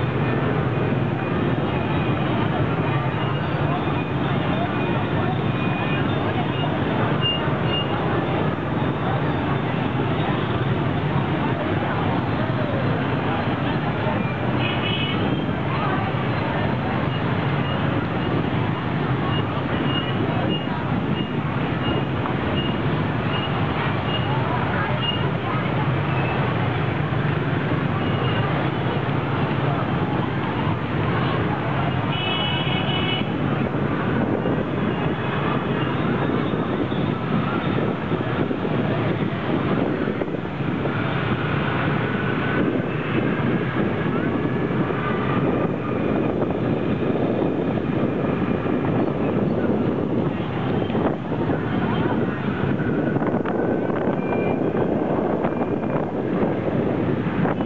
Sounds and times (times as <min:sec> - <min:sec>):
Outside, urban or manmade: 0:00.0 - 0:57.6
Traffic noise, roadway noise: 0:00.0 - 0:57.6.